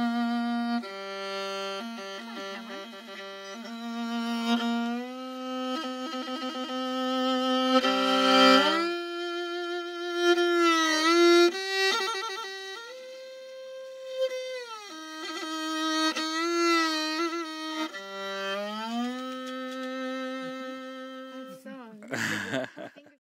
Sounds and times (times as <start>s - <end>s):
Violin, fiddle: 0.0s - 23.2s.